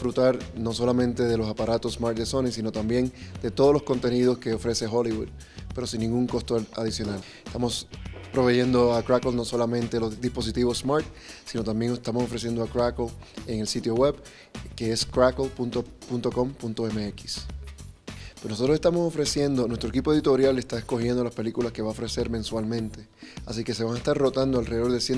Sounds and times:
Speech: 0.0 - 17.5, 18.4 - 25.1
Music: 0.0 - 25.1.

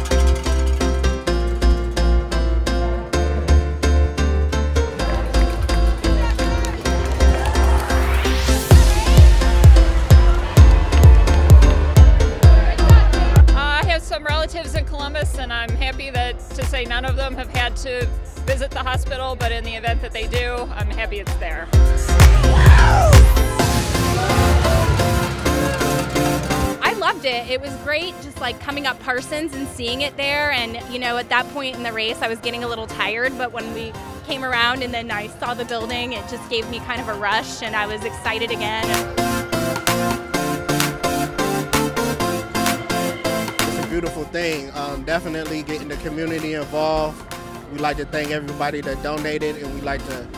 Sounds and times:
Music: 0.0 - 50.3.

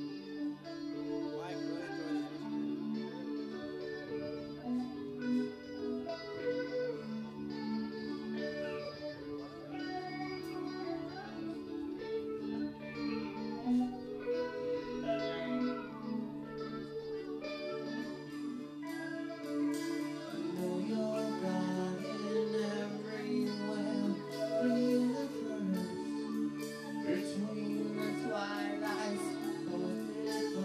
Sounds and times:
Music: 0.0 - 30.6.

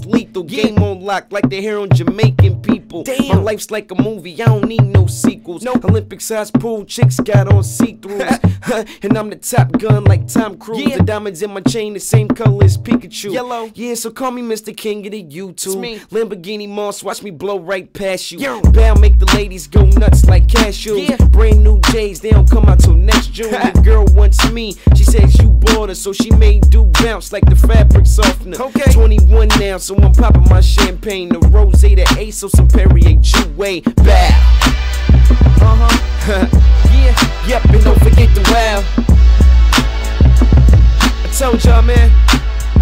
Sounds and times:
Music: 0.0 - 17.5, 18.4 - 42.8.

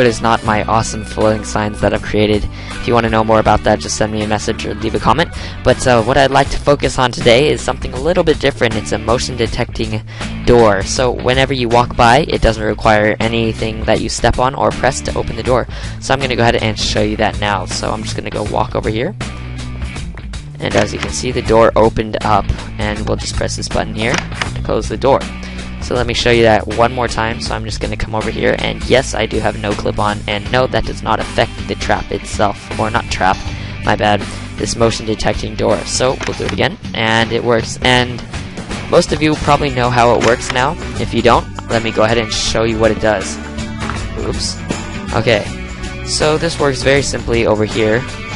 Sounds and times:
Speech: 0.0 - 19.2, 20.6 - 38.2, 38.9 - 43.4, 44.2 - 45.5, 46.1 - 48.1
Music: 0.0 - 48.3.

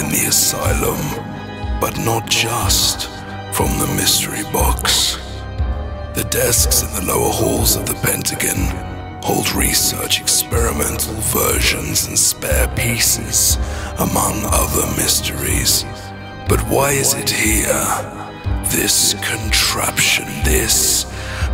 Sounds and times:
Speech: 0.0 - 5.4, 6.2 - 21.5
Music: 0.0 - 21.5.

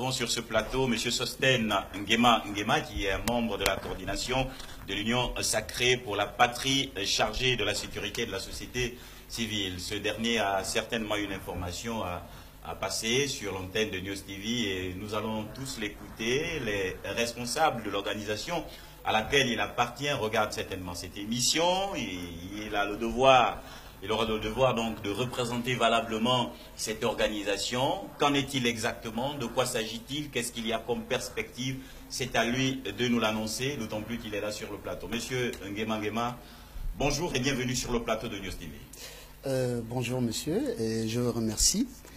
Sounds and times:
Speech: 0.0 - 36.4, 37.0 - 42.0.

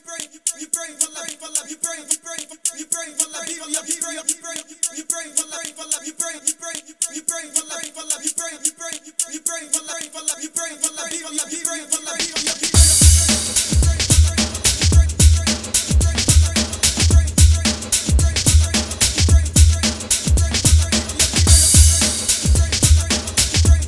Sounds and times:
Music: 0.2 - 23.8.

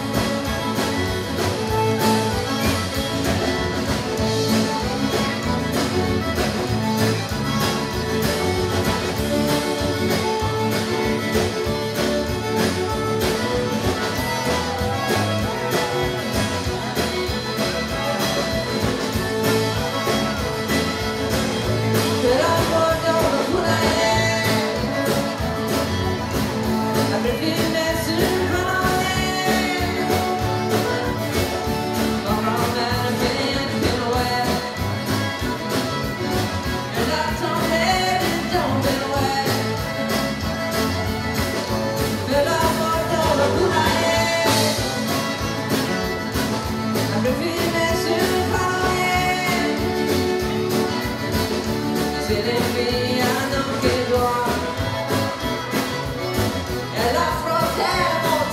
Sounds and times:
Music: 0.0 - 58.5.

